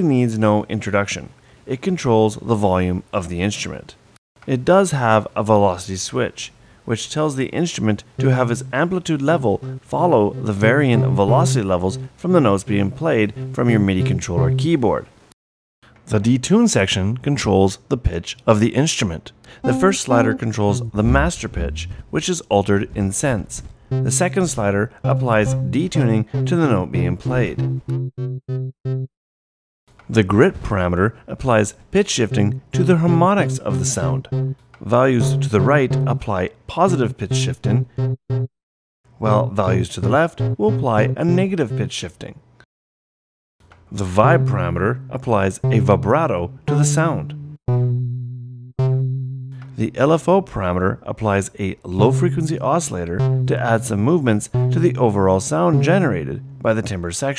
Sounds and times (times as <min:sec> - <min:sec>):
Speech: 0:00.0 - 0:15.1, 0:16.0 - 0:27.6, 0:30.1 - 0:37.8, 0:39.2 - 0:42.4, 0:43.9 - 0:47.3, 0:49.8 - 0:57.3
Synthesizer: 0:19.6 - 0:20.5.